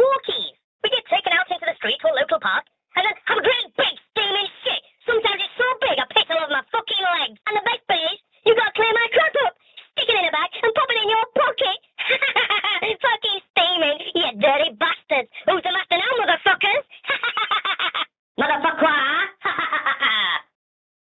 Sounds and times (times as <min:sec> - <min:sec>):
Speech: 0:00.0 - 0:17.2, 0:18.4 - 0:20.5.